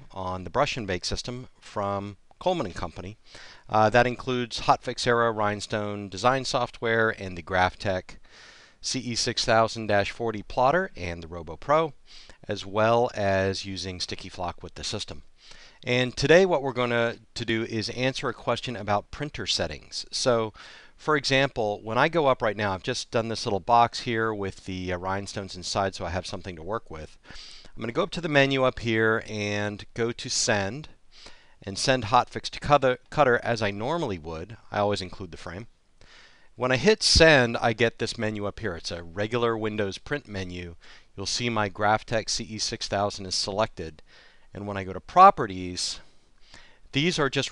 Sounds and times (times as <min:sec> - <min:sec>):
Speech: 0:00.0 - 0:08.2, 0:08.8 - 0:27.2, 0:27.8 - 0:31.0, 0:31.6 - 0:35.7, 0:36.6 - 0:44.0, 0:44.6 - 0:46.1, 0:46.9 - 0:47.5.